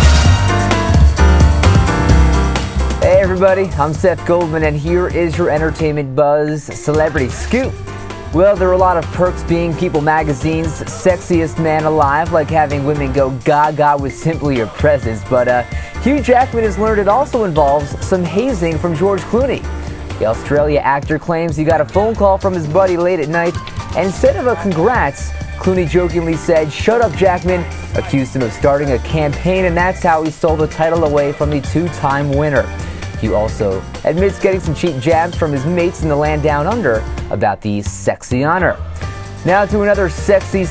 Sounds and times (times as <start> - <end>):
Music: 0.0 - 40.7
Speech: 3.0 - 7.7, 8.4 - 19.6, 20.2 - 38.8, 39.4 - 40.7.